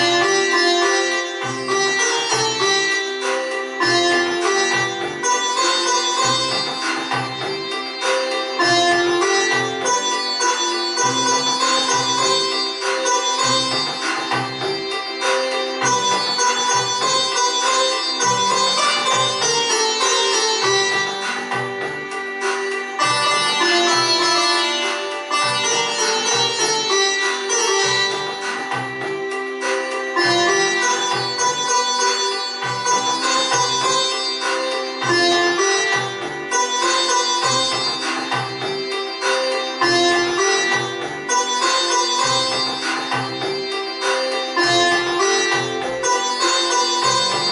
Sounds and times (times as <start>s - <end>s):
Keyboard (musical): 0.0s - 47.5s
Sitar: 0.0s - 47.5s.